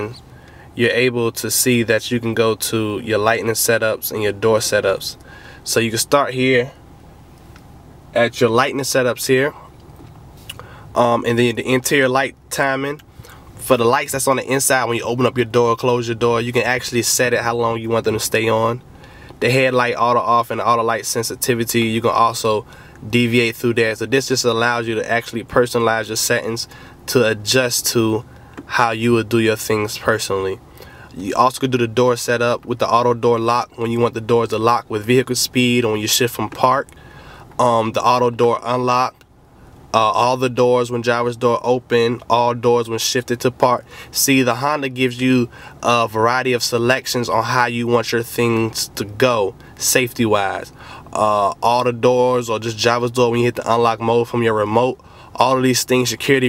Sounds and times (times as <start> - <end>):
Speech: 0.0 - 0.2, 0.8 - 6.8, 8.2 - 9.7, 11.0 - 13.0, 13.6 - 18.8, 19.4 - 30.6, 31.2 - 36.9, 37.6 - 39.2, 39.9 - 56.4.